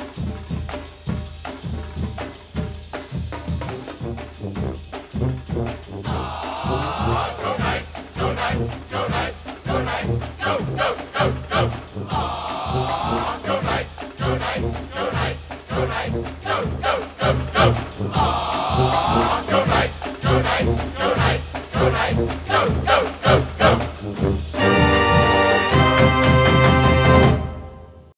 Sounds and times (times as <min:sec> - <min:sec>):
Music: 0:00.0 - 0:28.1.